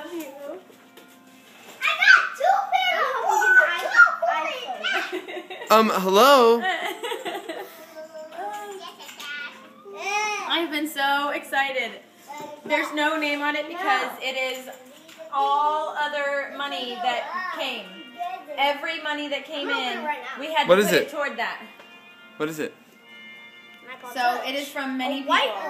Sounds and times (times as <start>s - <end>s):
Child speech, kid speaking: 0.0s - 0.7s, 1.8s - 6.4s, 8.0s - 10.6s, 12.3s - 13.1s, 14.8s - 15.8s, 16.6s - 18.8s, 19.5s - 20.6s, 23.9s - 25.7s.